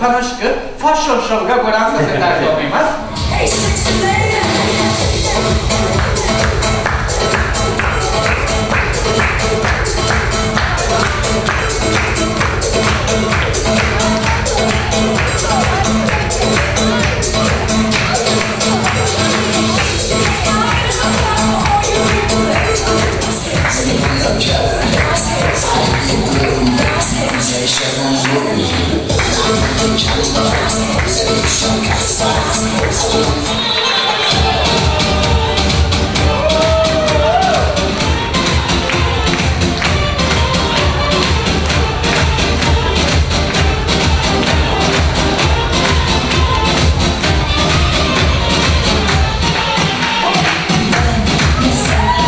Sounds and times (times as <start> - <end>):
Speech: 0.0 - 4.8, 19.8 - 30.4
Music: 2.9 - 52.2.